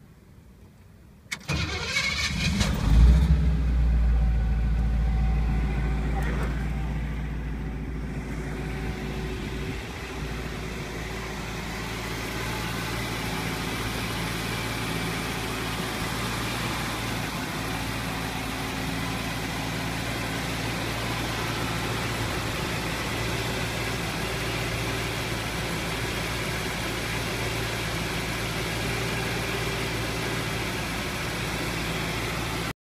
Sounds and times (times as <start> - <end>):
Car: 0.0 - 32.8.